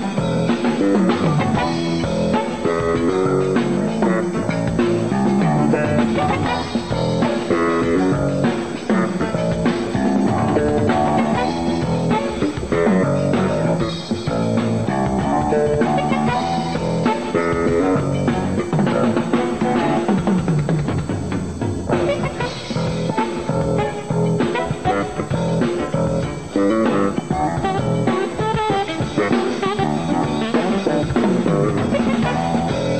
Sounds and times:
Jazz: 0.0 - 32.9.

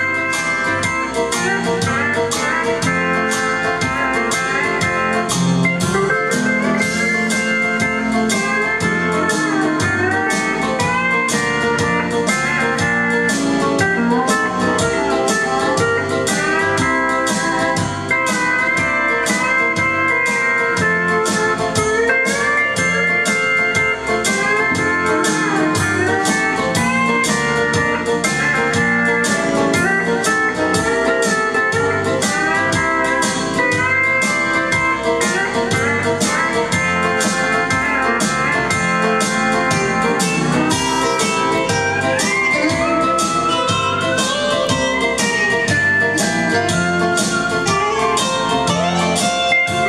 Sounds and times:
Steel guitar, slide guitar: 0.0 - 49.8.

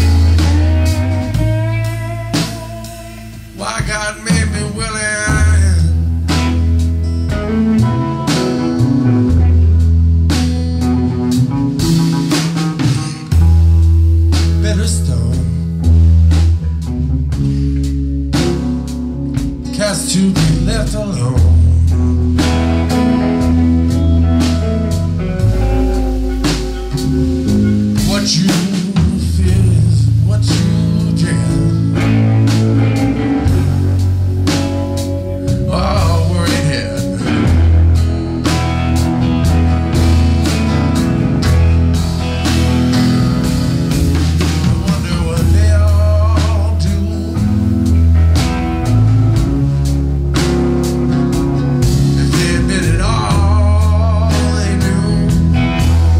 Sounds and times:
Psychedelic rock: 0.0 - 56.2.

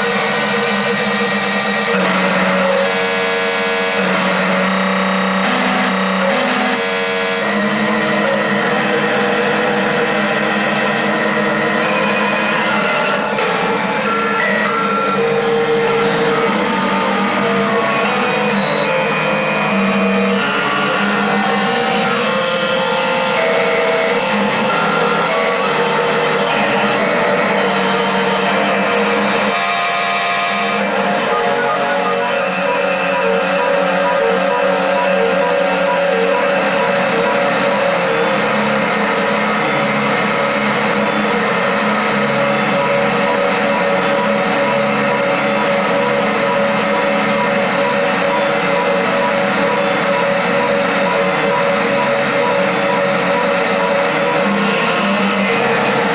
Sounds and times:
Sampler: 0.0 - 56.1.

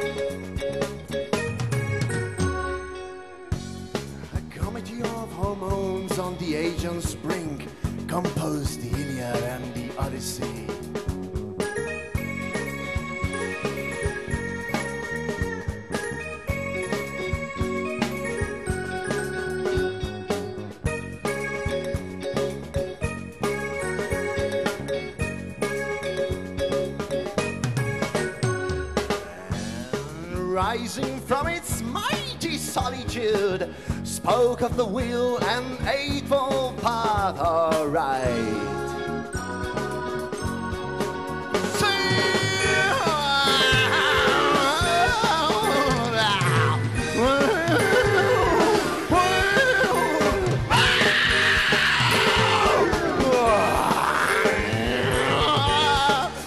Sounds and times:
Rock music: 0.0 - 56.4.

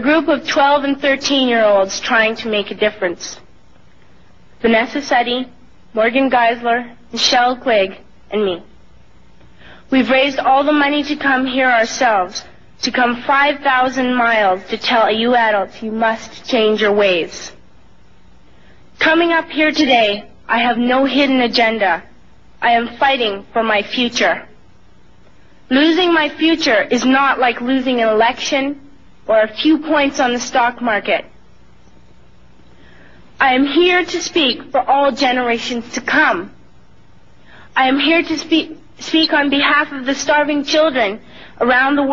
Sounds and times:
Female speech, woman speaking: 0.0 - 3.4, 4.6 - 8.7, 9.9 - 17.6, 19.0 - 24.6, 25.7 - 31.3, 33.4 - 36.6, 37.8 - 42.1.

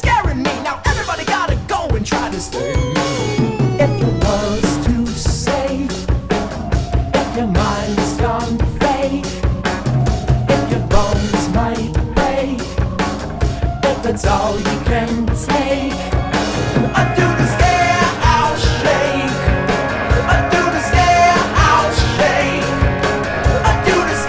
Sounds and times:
Music: 0.0 - 24.2.

